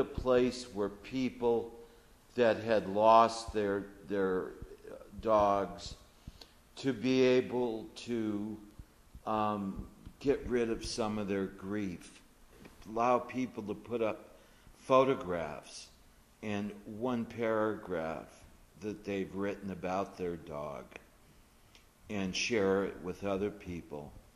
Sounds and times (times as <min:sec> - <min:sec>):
Speech: 0:00.0 - 0:01.8, 0:02.4 - 0:06.0, 0:06.8 - 0:12.2, 0:12.8 - 0:21.1, 0:22.1 - 0:24.2.